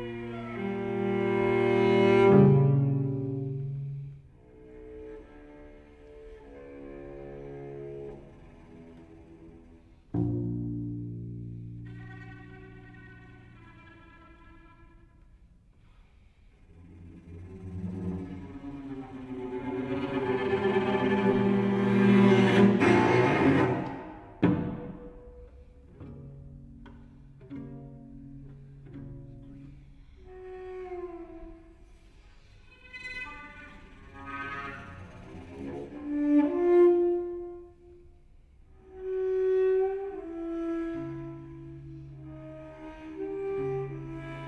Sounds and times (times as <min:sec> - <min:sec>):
Cello: 0:00.0 - 0:44.4.